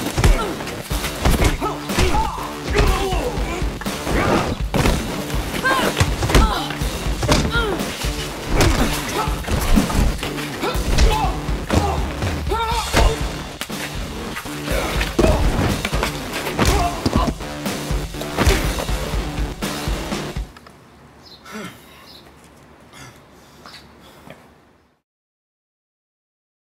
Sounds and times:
Music: 0.0s - 20.5s.

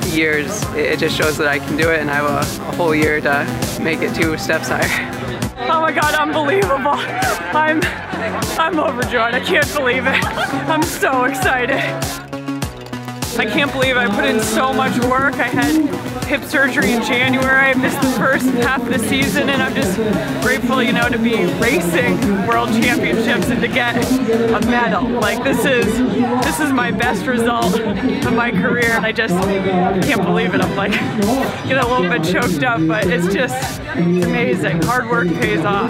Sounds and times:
Music: 0.0s - 35.9s
Speech: 13.4s - 35.9s.

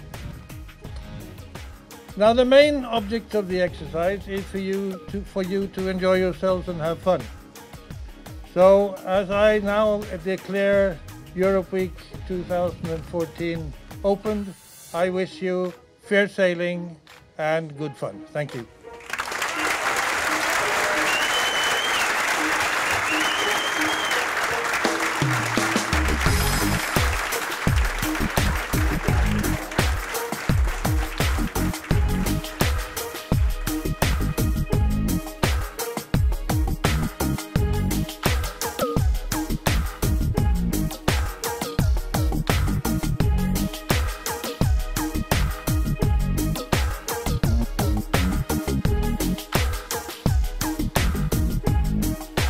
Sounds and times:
Music: 0.0s - 52.5s
Speech: 2.2s - 7.3s, 8.6s - 18.7s
Applause: 18.9s - 33.0s.

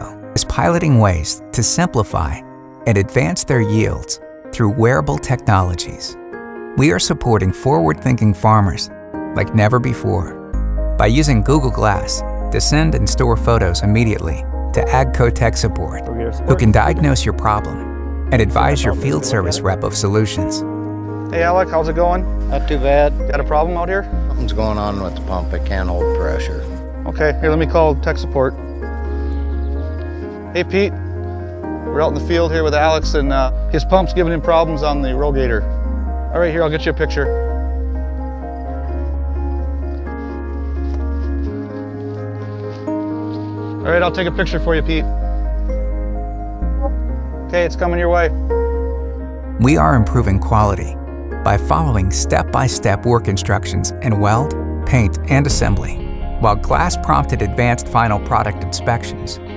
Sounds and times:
Speech: 0.0s - 6.2s, 6.8s - 10.3s, 11.0s - 17.8s, 18.4s - 20.6s, 21.3s - 28.6s, 31.9s - 35.6s, 36.4s - 37.3s, 43.8s - 45.0s, 49.6s - 59.4s
Music: 0.0s - 59.5s.

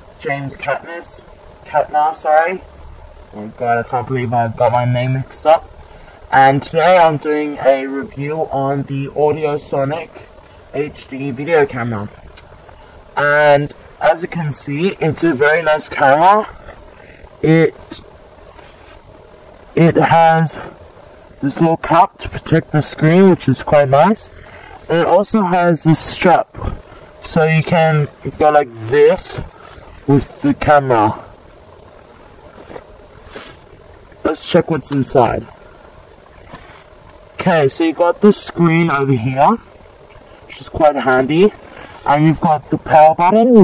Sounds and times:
Speech: 0.2s - 2.7s, 3.3s - 5.7s, 6.3s - 12.2s, 13.2s - 16.6s, 17.4s - 18.0s, 19.8s - 20.7s, 21.4s - 24.3s, 24.9s - 29.5s, 30.1s - 31.3s, 34.2s - 35.5s, 37.4s - 39.7s, 40.5s - 43.6s.

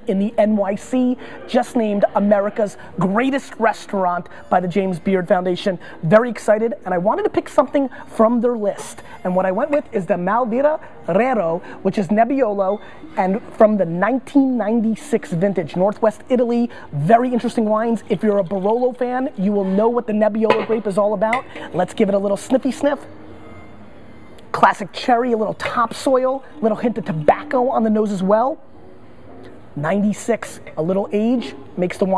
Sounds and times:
Speech: 0.1s - 23.1s, 29.8s - 32.1s.

